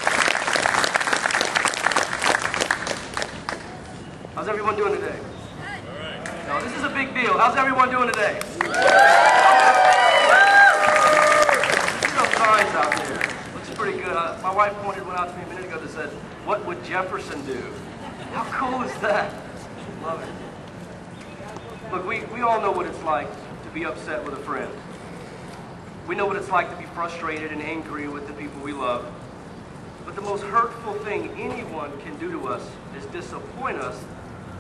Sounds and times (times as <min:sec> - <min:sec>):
Male speech, man speaking: 0:04.4 - 0:05.3, 0:05.9 - 0:08.4, 0:12.0 - 0:17.8, 0:18.4 - 0:19.4, 0:20.0 - 0:20.4, 0:21.9 - 0:24.8, 0:26.1 - 0:29.1, 0:30.1 - 0:34.1
Narration, monologue: 0:04.4 - 0:05.4, 0:06.5 - 0:08.6, 0:12.0 - 0:20.4, 0:21.3 - 0:34.2.